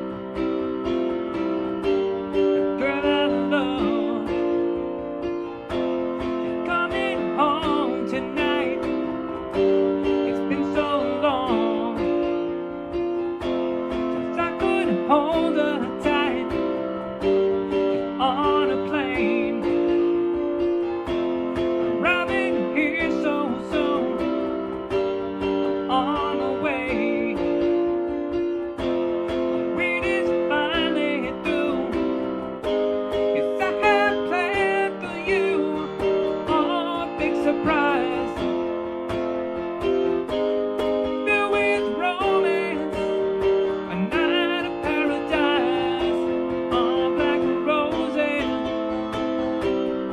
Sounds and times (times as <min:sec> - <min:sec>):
Piano: 0:00.0 - 0:50.1.